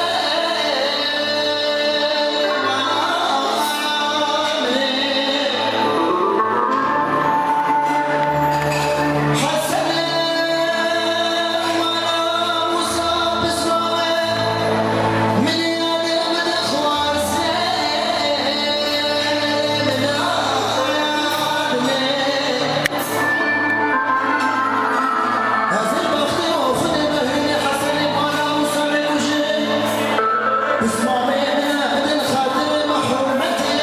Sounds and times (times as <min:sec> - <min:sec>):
Male singing: 0:00.0 - 0:06.6, 0:09.3 - 0:23.2, 0:25.7 - 0:33.8
Music: 0:00.0 - 0:33.8.